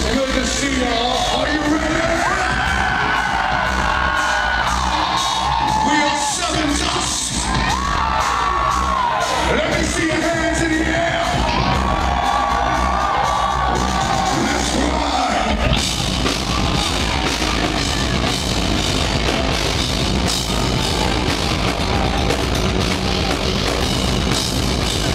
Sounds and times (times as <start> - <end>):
Speech: 0.0 - 2.5, 5.8 - 7.4, 9.5 - 11.4, 14.4 - 15.7
Heavy metal: 0.0 - 25.1
Inside, large room or hall: 0.0 - 25.1
Musical instrument: 7.8 - 25.1.